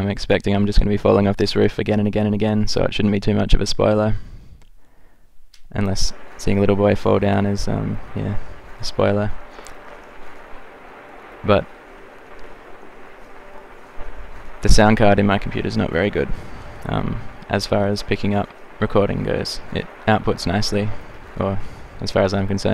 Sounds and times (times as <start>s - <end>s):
Speech: 0.0s - 4.2s, 5.7s - 9.5s, 11.4s - 11.7s, 14.6s - 22.7s.